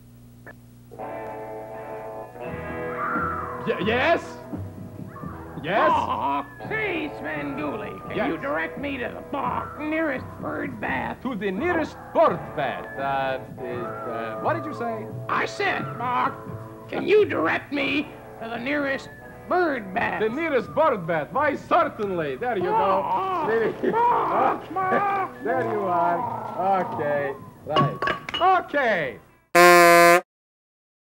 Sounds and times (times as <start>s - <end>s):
Speech: 5.6s - 24.6s, 25.4s - 29.2s.